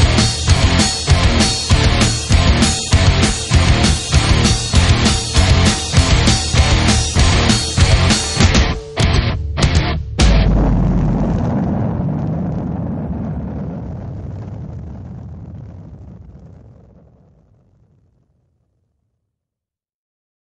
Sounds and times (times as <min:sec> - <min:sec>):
Music: 0:00.0 - 0:11.0.